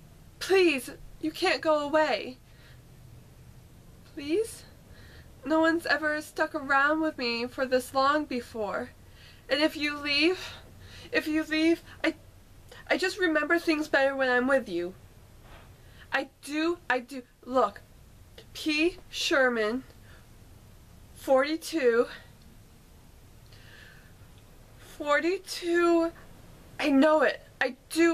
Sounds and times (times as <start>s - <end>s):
Narration, monologue: 0.3s - 28.1s.